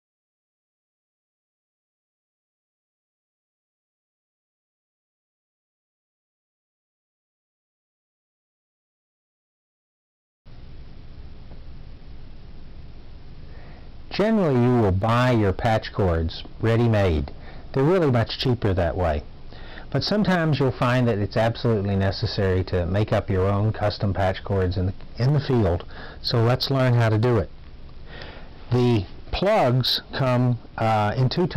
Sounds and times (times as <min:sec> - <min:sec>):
Speech: 0:14.1 - 0:19.3, 0:19.9 - 0:27.5, 0:28.7 - 0:31.5.